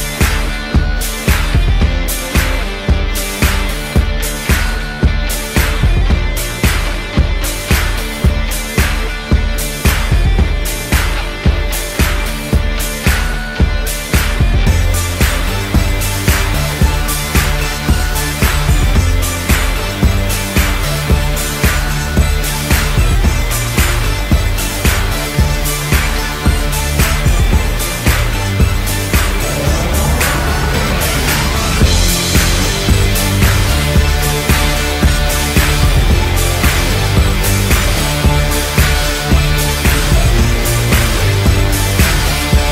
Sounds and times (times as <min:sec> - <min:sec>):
Music: 0:00.0 - 0:42.7.